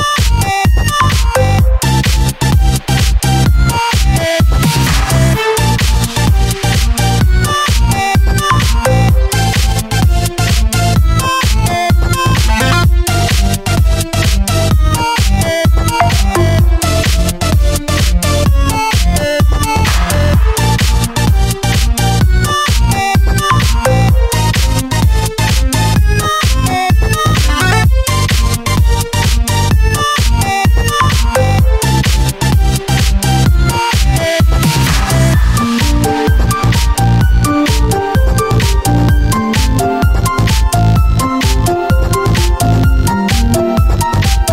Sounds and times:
Dubstep: 12.2 - 12.9, 19.6 - 23.0, 27.1 - 28.0, 34.6 - 36.8.

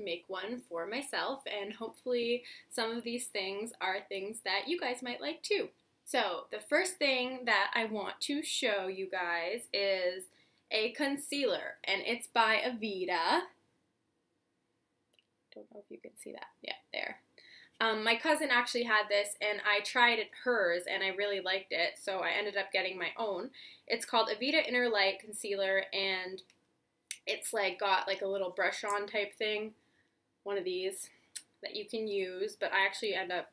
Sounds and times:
Speech: 0.0 - 13.5, 15.6 - 17.2, 17.8 - 26.4, 27.1 - 29.7, 30.5 - 33.5.

